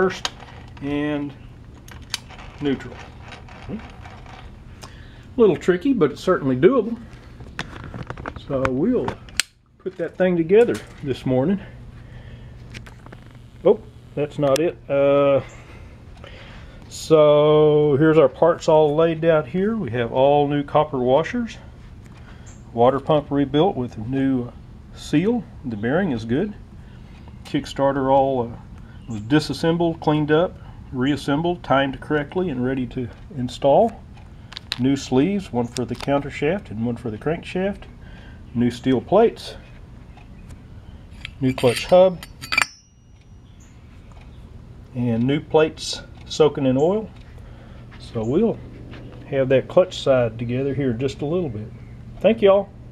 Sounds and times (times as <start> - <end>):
Speech: 0.0 - 1.4, 2.6 - 3.1, 5.4 - 7.1, 8.4 - 9.2, 9.8 - 11.8, 13.6 - 15.5, 16.9 - 21.7, 22.7 - 26.6, 27.4 - 34.0, 34.8 - 37.9, 38.6 - 39.7, 41.4 - 42.2, 44.9 - 47.2, 48.0 - 48.6, 49.3 - 52.8.